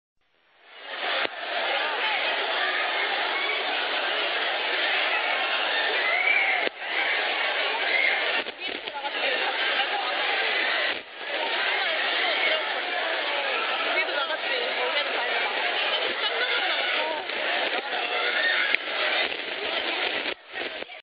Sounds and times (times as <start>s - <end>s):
Speech: 0.8s - 21.0s.